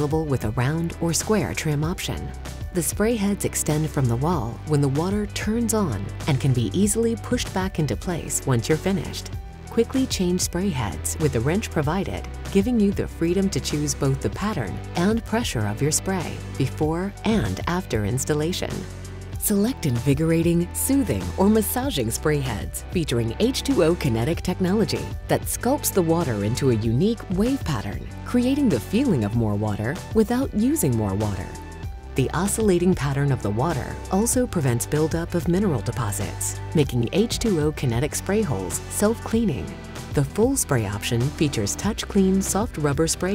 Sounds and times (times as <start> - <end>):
Speech: 0.0 - 31.6, 32.2 - 43.3
Music: 0.0 - 43.3.